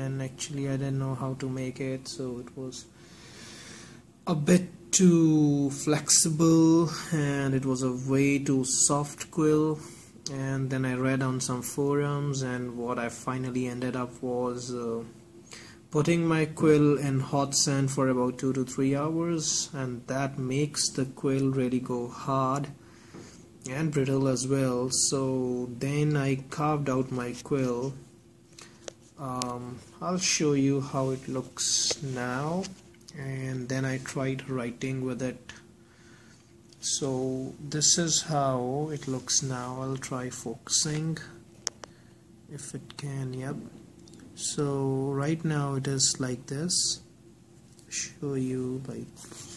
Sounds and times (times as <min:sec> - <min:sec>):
Speech: 0:00.0 - 0:02.9, 0:04.2 - 0:15.2, 0:15.9 - 0:22.8, 0:23.6 - 0:28.1, 0:29.2 - 0:35.7, 0:36.8 - 0:41.4, 0:42.5 - 0:43.8, 0:44.4 - 0:47.1, 0:47.8 - 0:49.4.